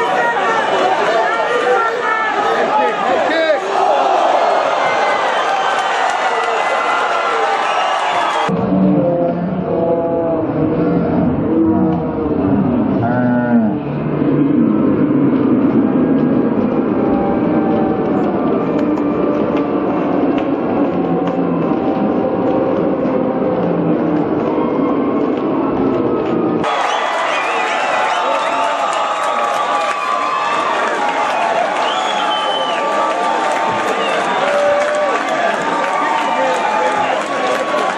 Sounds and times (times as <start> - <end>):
Speech: 0.0 - 3.7.